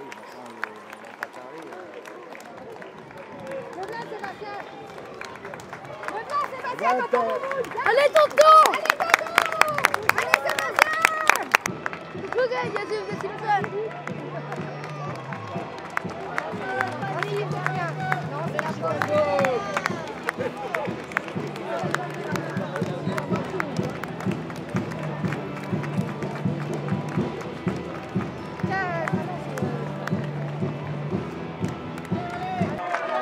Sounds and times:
Crowd: 0.0 - 33.2
Outside, urban or manmade: 0.0 - 33.2
Run: 0.0 - 33.2
Music: 2.9 - 33.2
Speech: 12.2 - 15.2, 16.3 - 24.0.

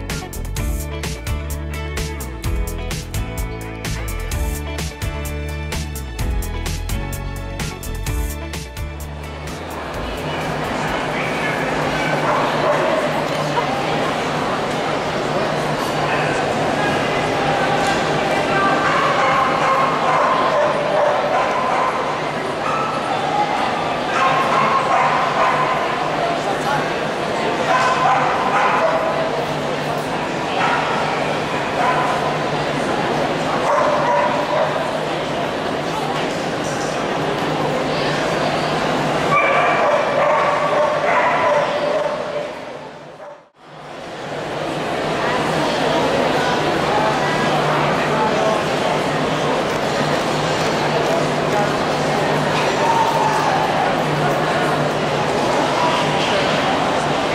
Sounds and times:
Bow-wow: 12.0 - 13.2, 18.9 - 23.0, 24.2 - 25.9, 27.7 - 29.2, 33.6 - 34.8, 39.3 - 42.6.

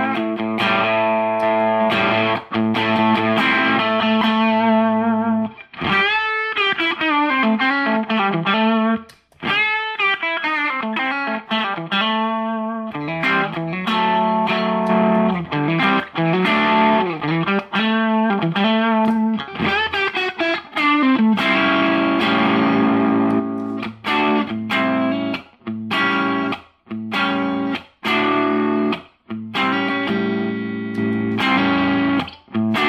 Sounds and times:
Steel guitar, slide guitar: 0.0 - 9.0, 9.6 - 32.8
Distortion: 0.0 - 32.8.

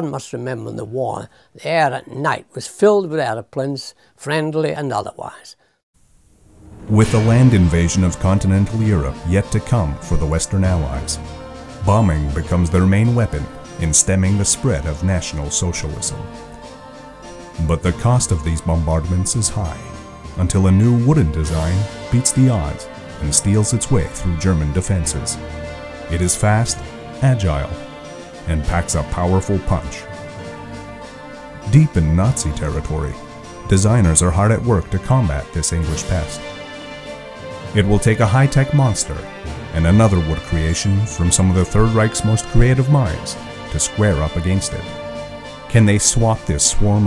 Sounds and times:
Speech: 0.0 - 5.6, 6.9 - 11.2, 11.8 - 16.3, 17.6 - 25.4, 26.1 - 27.8, 28.4 - 30.1, 31.6 - 36.5, 37.7 - 45.0, 45.7 - 47.0
Music: 6.2 - 47.0.

